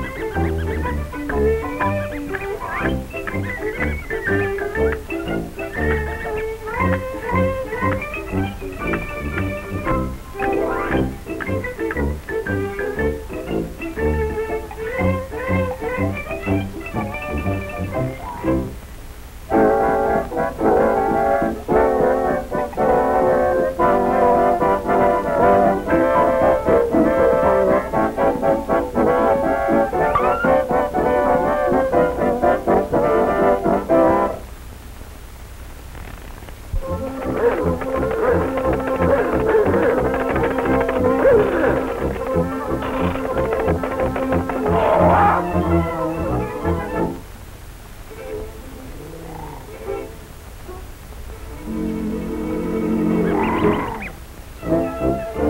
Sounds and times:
Music: 0.0s - 34.6s, 36.8s - 47.4s, 48.0s - 55.5s.

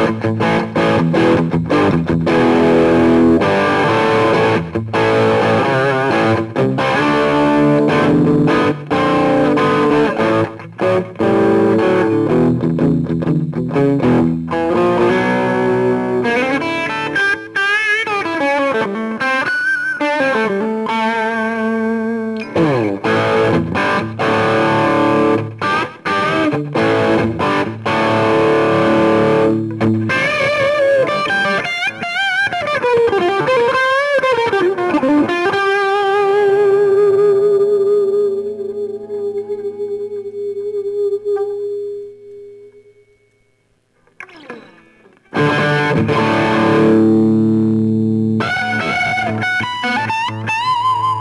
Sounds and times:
Electric guitar: 0.0s - 51.2s.

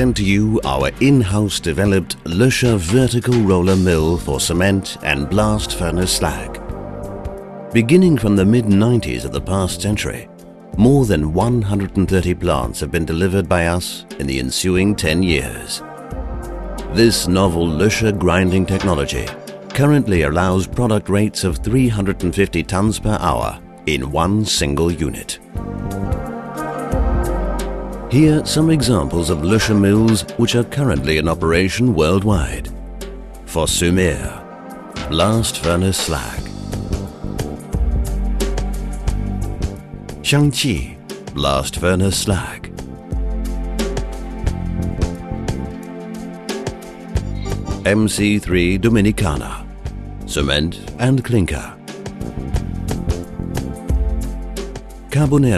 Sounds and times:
Speech: 0.0s - 6.6s, 7.8s - 15.9s, 16.9s - 25.4s, 28.1s - 32.7s, 33.5s - 34.4s, 35.0s - 36.6s, 40.2s - 42.7s, 47.8s - 49.7s, 50.3s - 51.8s, 55.1s - 55.5s
Music: 0.0s - 55.5s.

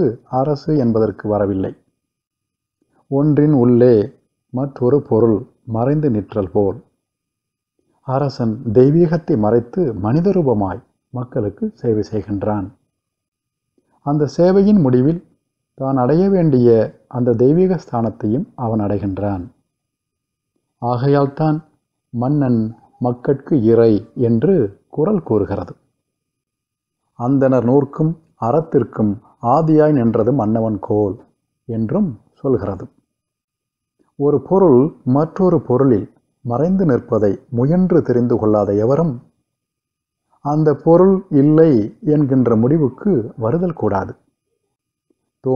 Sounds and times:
Male speech, man speaking: 0.0s - 1.8s, 3.1s - 6.9s, 8.1s - 12.8s, 14.1s - 19.6s, 20.8s - 25.8s, 27.2s - 33.0s, 34.2s - 39.3s, 40.4s - 44.2s
Narration, monologue: 0.0s - 45.5s.

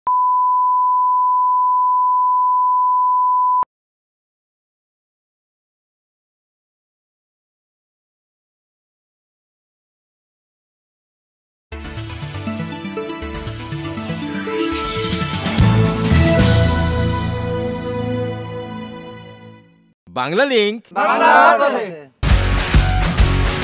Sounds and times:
Beep, bleep: 0.1s - 3.6s.

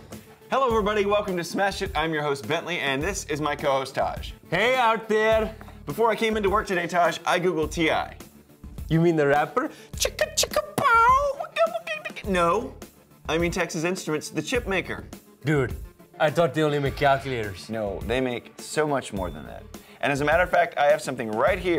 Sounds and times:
Music: 0.0s - 21.7s
Speech: 0.5s - 8.2s, 8.9s - 21.7s.

